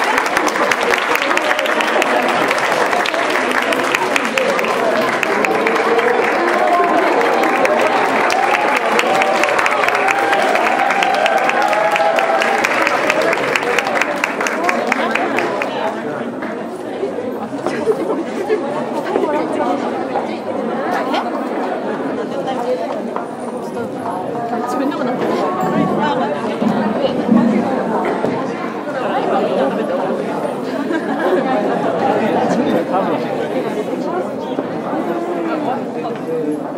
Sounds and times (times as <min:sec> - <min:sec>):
Chatter: 0:00.0 - 0:36.7
Inside, large room or hall: 0:00.0 - 0:36.7.